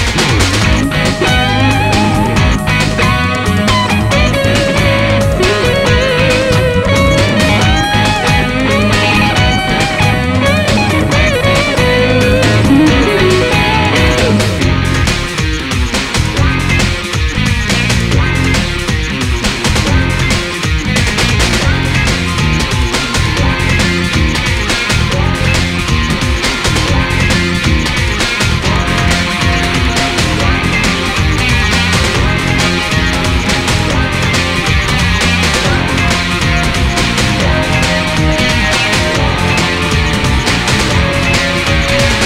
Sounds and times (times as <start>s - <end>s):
Sampler: 0.0s - 19.1s.